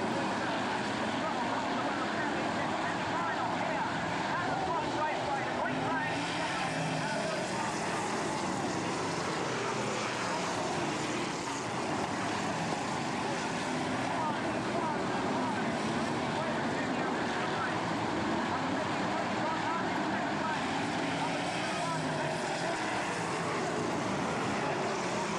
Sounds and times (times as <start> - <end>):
Car passing by: 0.0 - 25.3
Speech: 0.0 - 25.3.